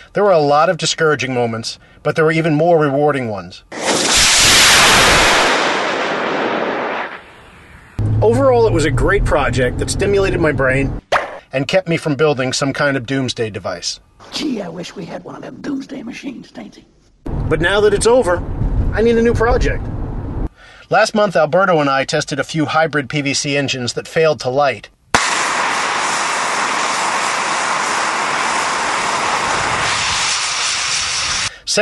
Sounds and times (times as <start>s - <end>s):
Speech: 0.2s - 3.7s, 8.2s - 16.9s, 17.5s - 19.8s, 20.9s - 25.0s.